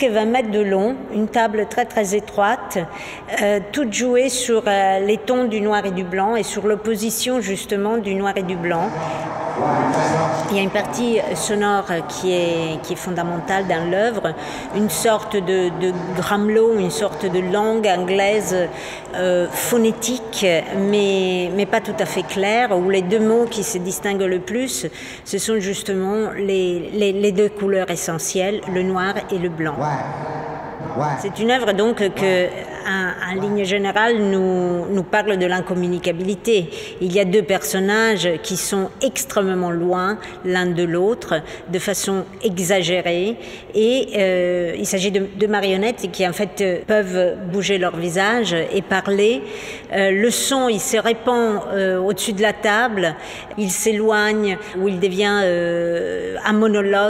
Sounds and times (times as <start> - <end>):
Speech: 9.6 - 57.0.